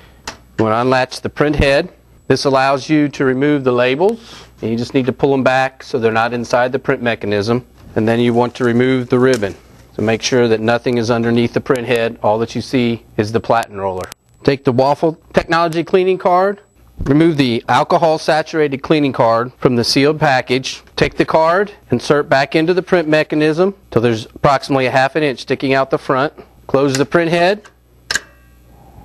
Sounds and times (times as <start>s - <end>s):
Speech: 0.6s - 27.8s.